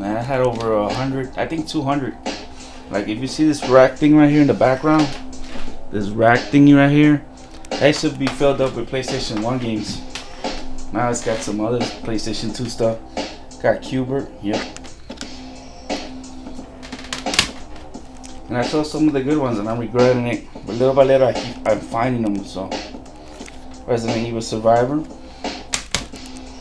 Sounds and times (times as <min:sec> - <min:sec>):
Speech: 0:00.0 - 0:02.2, 0:02.9 - 0:05.1, 0:05.9 - 0:07.2, 0:07.8 - 0:10.0, 0:10.9 - 0:13.0, 0:13.6 - 0:14.7, 0:18.5 - 0:22.8, 0:23.9 - 0:25.1
Inside, small room: 0:00.0 - 0:26.6
Music: 0:00.0 - 0:26.6.